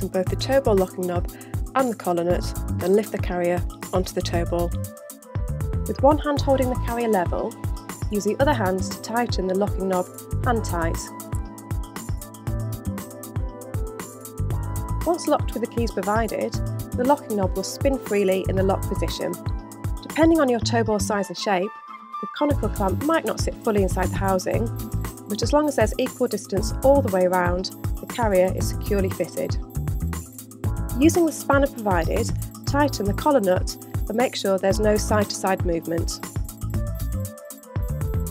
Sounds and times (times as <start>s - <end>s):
Speech: 0.0s - 4.8s, 5.9s - 11.1s, 15.1s - 19.4s, 20.0s - 24.7s, 25.3s - 29.6s, 31.0s - 36.2s
Music: 0.0s - 38.3s.